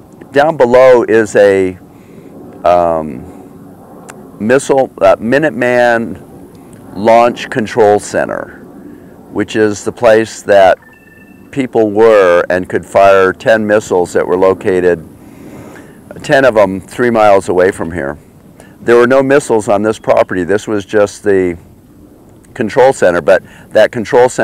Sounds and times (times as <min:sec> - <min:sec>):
Speech: 0:00.3 - 0:01.8, 0:02.7 - 0:03.3, 0:04.4 - 0:06.2, 0:07.0 - 0:08.6, 0:09.4 - 0:10.8, 0:11.5 - 0:15.0, 0:16.1 - 0:18.2, 0:18.8 - 0:21.6, 0:22.5 - 0:24.4.